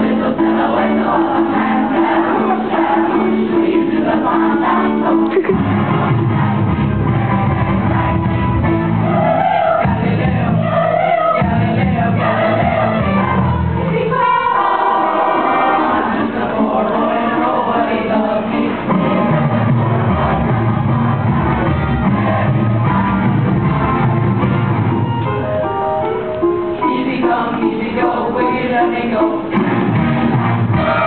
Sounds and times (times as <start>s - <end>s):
Choir: 0.0s - 24.4s, 26.8s - 31.0s.